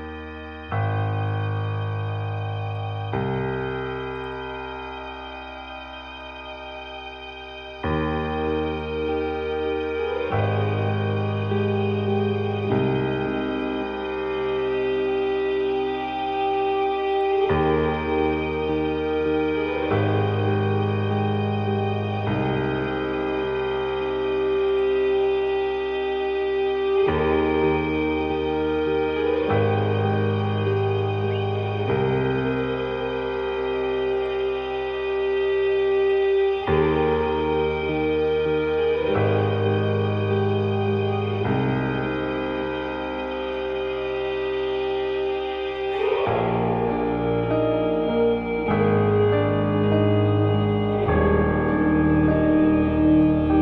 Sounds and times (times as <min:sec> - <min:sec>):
Music: 0:00.0 - 0:53.6.